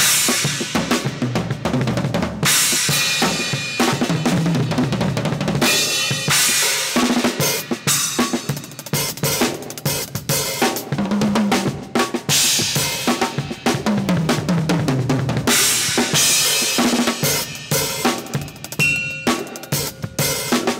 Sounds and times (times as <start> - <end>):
Percussion: 0.0 - 20.7.